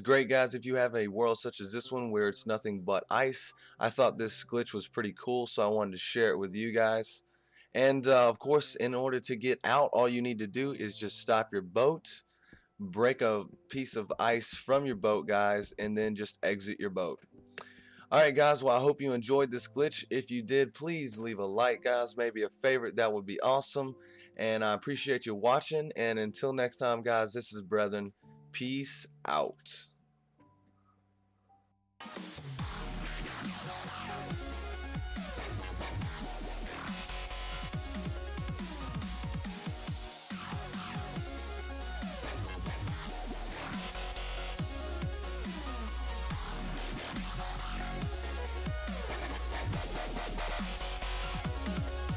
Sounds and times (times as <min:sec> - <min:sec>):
Speech: 0:00.0 - 0:07.2, 0:07.8 - 0:12.2, 0:12.8 - 0:17.2, 0:18.1 - 0:29.9.